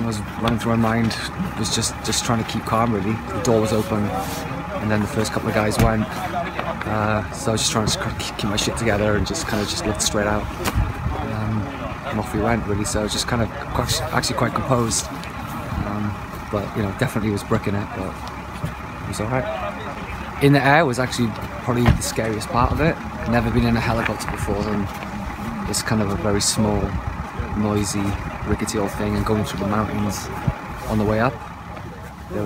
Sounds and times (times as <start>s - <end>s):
Speech: 0.0s - 18.3s, 19.0s - 24.9s, 25.6s - 32.4s
Outside, urban or manmade: 0.0s - 32.4s
Vehicle: 0.0s - 32.4s.